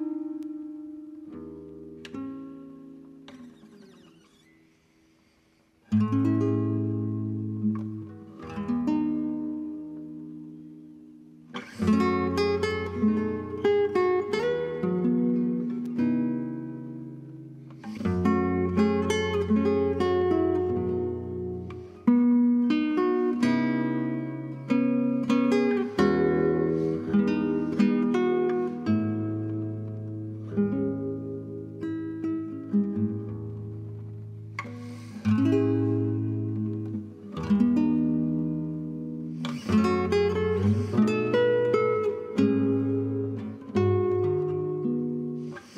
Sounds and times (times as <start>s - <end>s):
Acoustic guitar: 0.0s - 45.7s
Strum: 0.0s - 45.7s.